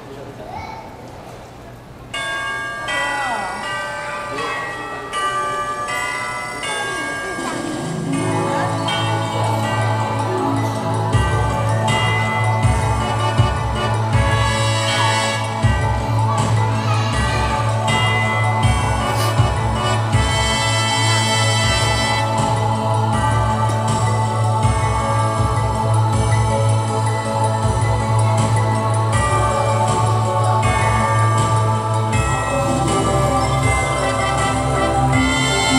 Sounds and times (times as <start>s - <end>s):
Jingle (music): 2.1s - 35.7s.